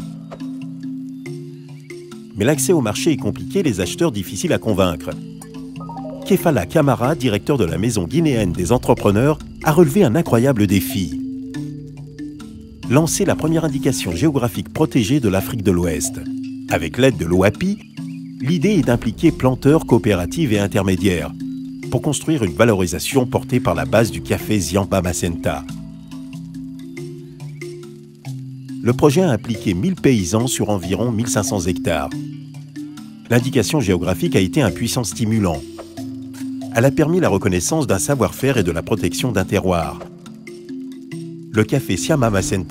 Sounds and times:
Music: 0.0 - 42.7
Speech: 2.4 - 5.2, 5.9 - 11.2, 12.9 - 17.8, 18.4 - 25.7, 28.8 - 32.2, 33.3 - 35.6, 36.8 - 40.1, 41.6 - 42.7.

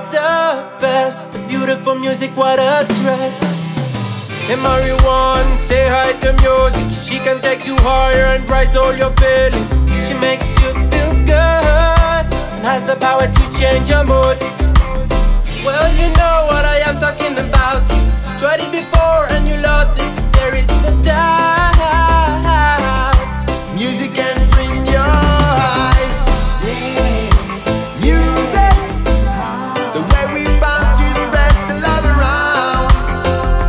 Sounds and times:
Music: 0.0 - 33.6.

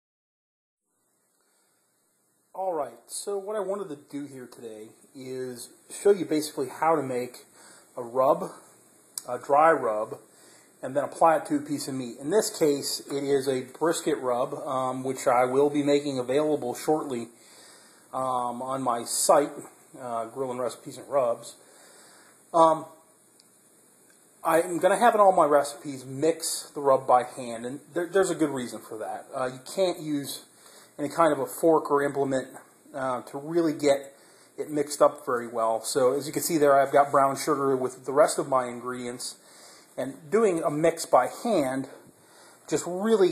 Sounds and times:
Inside, small room: 0.8 - 43.3
Silence: 0.9 - 5.9
Speech: 2.6 - 10.2, 10.8 - 17.4, 18.1 - 21.6, 22.5 - 23.0, 24.4 - 39.4, 40.0 - 42.1, 42.7 - 43.3.

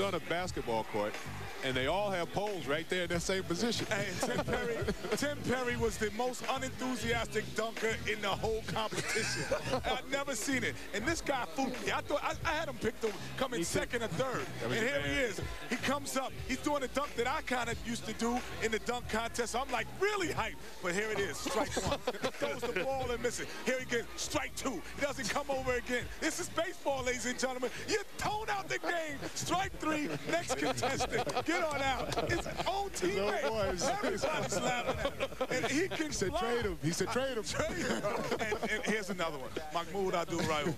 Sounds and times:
Speech: 0.0 - 40.7.

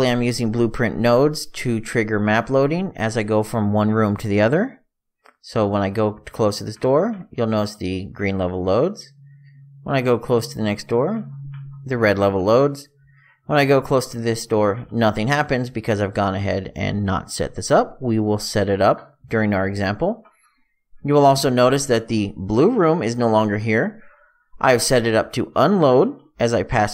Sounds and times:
Speech: 0.0 - 20.3, 21.0 - 26.9.

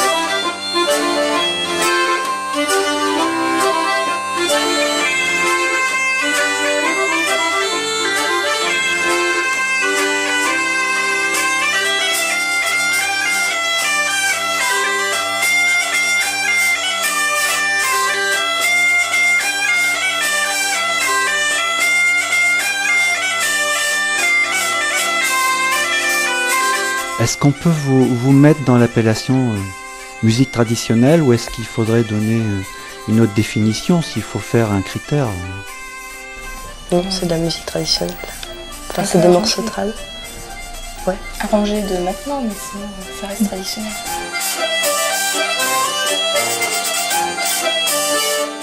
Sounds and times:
Bagpipes: 0.0 - 48.6.

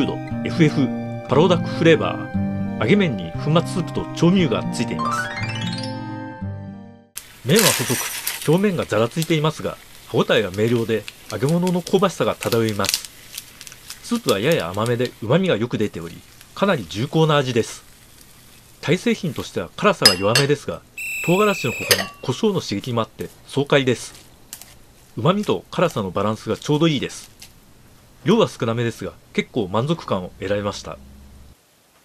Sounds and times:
Speech: 0.0 - 5.1, 7.4 - 13.0, 14.0 - 17.8, 18.8 - 20.8, 21.4 - 24.2, 25.2 - 27.3, 28.2 - 31.0.

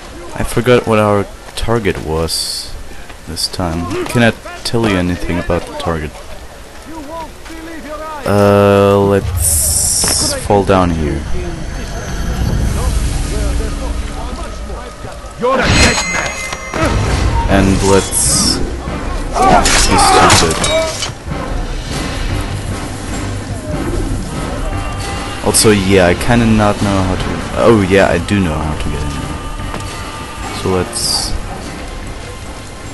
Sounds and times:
Speech: 0.1 - 12.0, 16.8 - 18.6, 19.4 - 20.9, 25.5 - 29.2, 30.5 - 31.4
Music: 11.1 - 32.9.

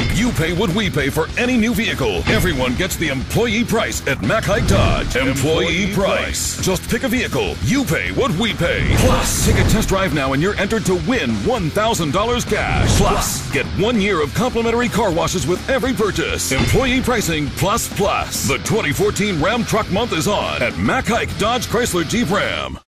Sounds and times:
Music: 0.0 - 22.8
Speech: 0.0 - 22.8.

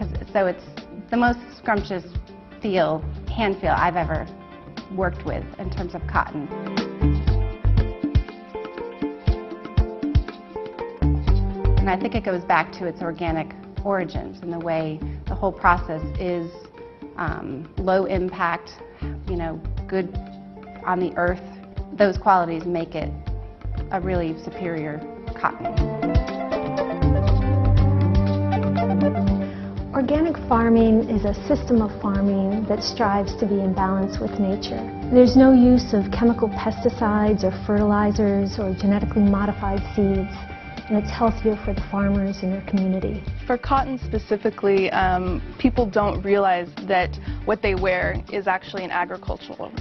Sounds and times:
Female speech, woman speaking: 0.0 - 4.3, 4.9 - 6.5, 11.8 - 16.6, 17.2 - 20.2, 20.8 - 21.4, 22.0 - 23.2, 23.9 - 25.8, 30.0 - 49.8.

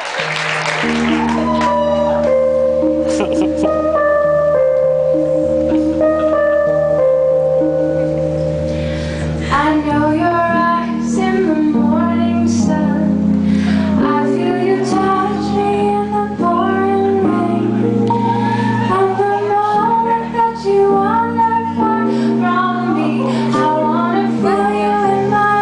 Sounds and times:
Music: 0.0 - 25.6
Female singing: 9.5 - 13.2, 13.9 - 25.6.

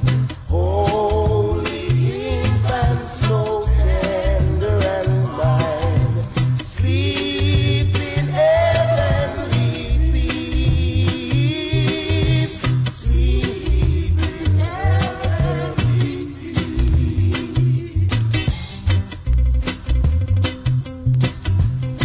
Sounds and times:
Jingle (music): 0.0 - 22.0.

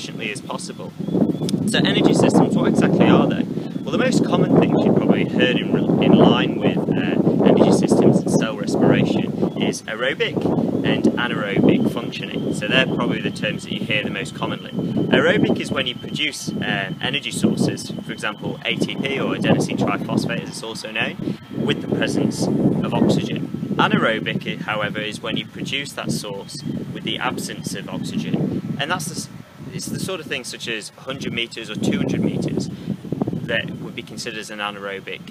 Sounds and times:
Speech: 0.0 - 0.9, 1.7 - 32.7, 33.5 - 35.3
Outside, rural or natural: 0.0 - 35.3.

